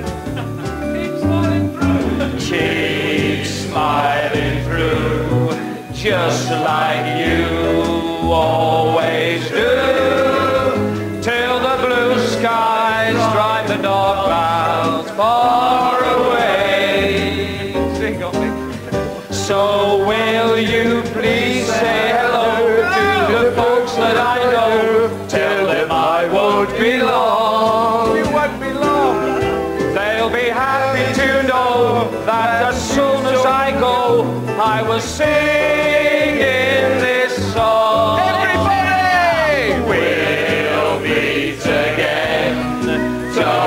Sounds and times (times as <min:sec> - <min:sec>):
Music: 0:00.0 - 0:43.6
Singing: 0:01.4 - 0:18.5, 0:19.3 - 0:43.6.